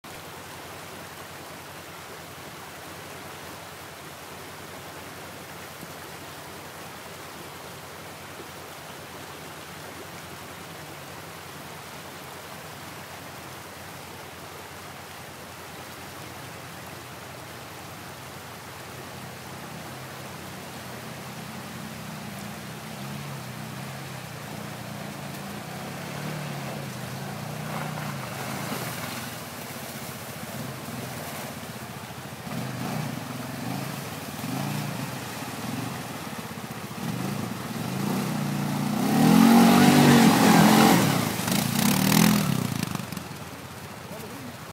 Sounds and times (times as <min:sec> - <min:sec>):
Stream: 0:00.0 - 0:44.7.